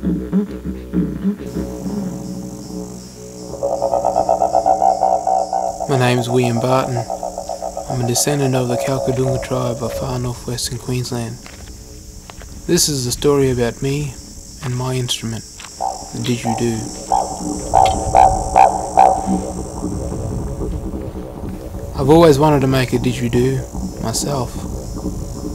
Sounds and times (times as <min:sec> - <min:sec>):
Didgeridoo: 0:00.0 - 0:14.5, 0:15.6 - 0:25.5
Speech: 0:05.9 - 0:07.1, 0:07.9 - 0:11.4, 0:12.7 - 0:15.4, 0:16.2 - 0:17.0, 0:22.0 - 0:24.6.